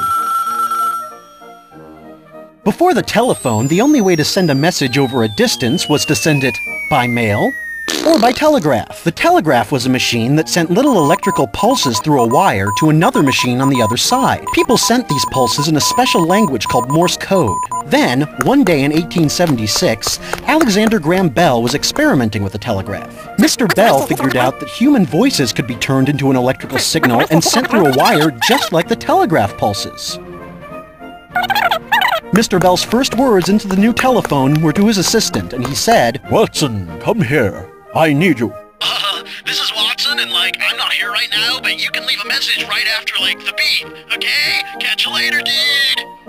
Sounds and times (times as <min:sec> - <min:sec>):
Music: 0:00.0 - 0:46.2
Speech: 0:02.7 - 0:07.5, 0:08.1 - 0:30.2, 0:32.3 - 0:46.1.